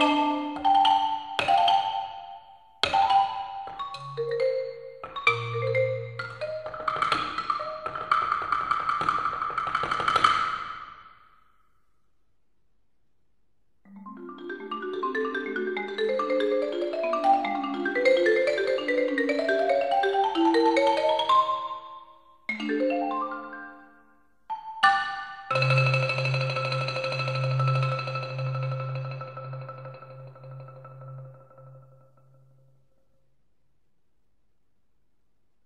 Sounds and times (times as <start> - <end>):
Vibraphone: 0.0 - 8.2, 13.9 - 32.5
Marimba, xylophone: 0.0 - 10.8, 13.9 - 32.4.